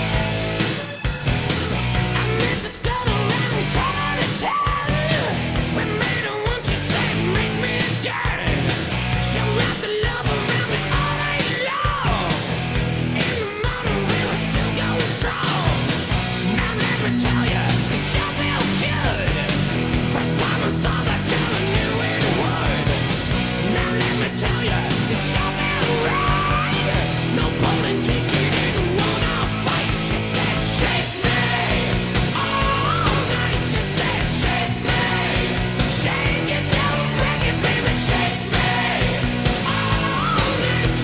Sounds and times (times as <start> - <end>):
Music: 0.0 - 41.0.